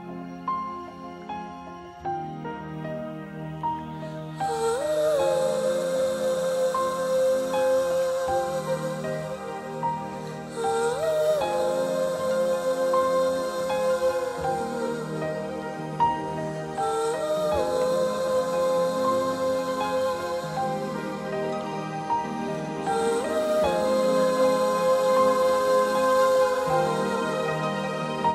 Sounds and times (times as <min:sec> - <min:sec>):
Music: 0:00.0 - 0:28.3.